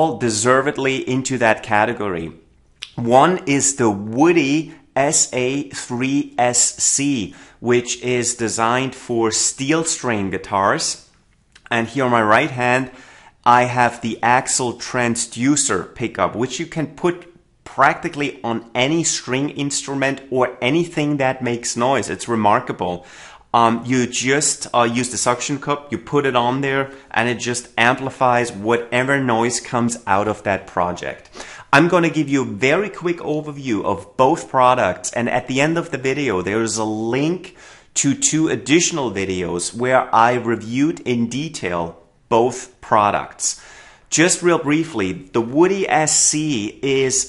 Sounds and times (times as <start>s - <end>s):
Speech: 0.0s - 47.2s.